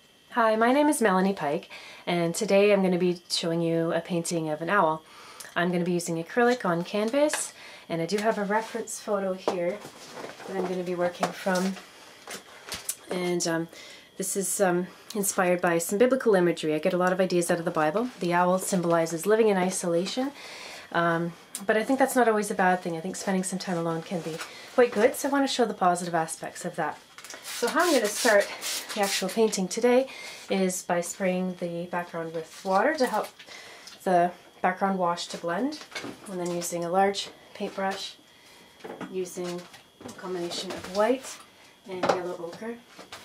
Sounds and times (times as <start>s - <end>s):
Speech: 0.3s - 5.0s, 5.6s - 9.8s, 10.5s - 11.8s, 13.1s - 27.0s, 27.6s - 33.3s, 34.0s - 38.2s, 39.1s - 42.8s.